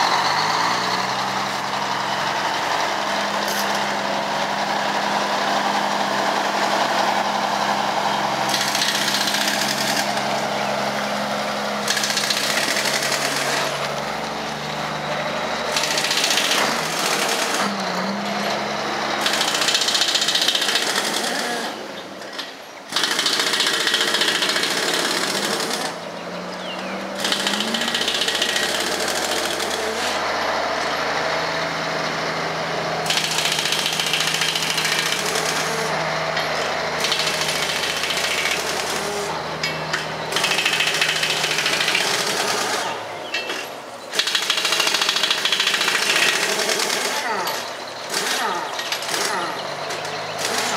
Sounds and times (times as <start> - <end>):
Truck: 0.0 - 50.7.